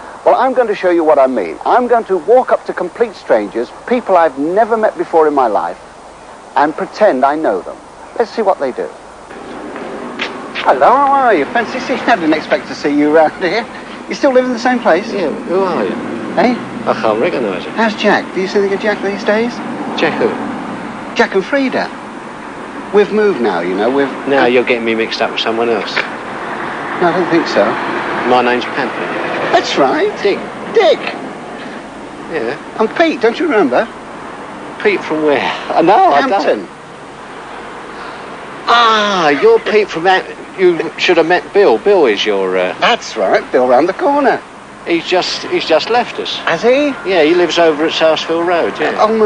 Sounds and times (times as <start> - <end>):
Speech: 0.3 - 5.8, 6.6 - 9.0, 10.6 - 20.4, 21.2 - 22.0, 29.5 - 31.2, 32.3 - 33.9, 34.8 - 36.7, 38.7 - 49.2.